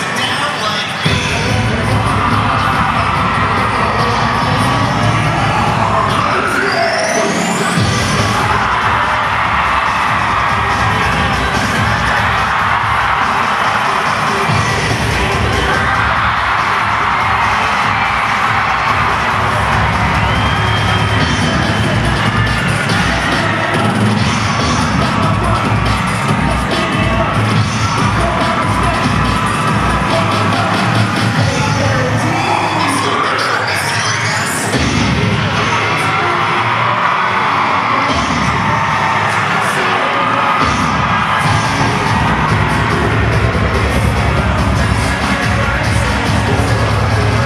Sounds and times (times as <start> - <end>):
Cheering: 0.0 - 47.4
Crowd: 0.0 - 47.4.